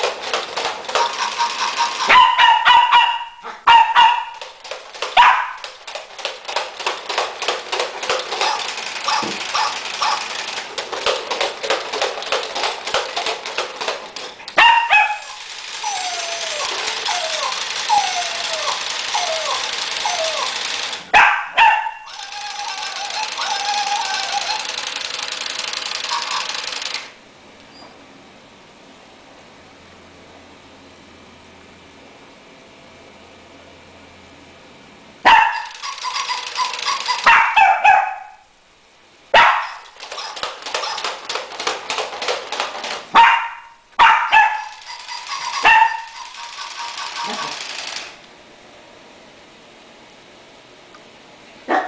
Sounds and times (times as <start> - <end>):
Inside, small room: 0.0 - 51.8
Dog: 0.9 - 4.5, 5.2 - 5.7, 8.3 - 10.3, 14.6 - 24.7, 26.0 - 26.6, 35.2 - 38.4, 39.4 - 41.2, 43.2 - 47.6.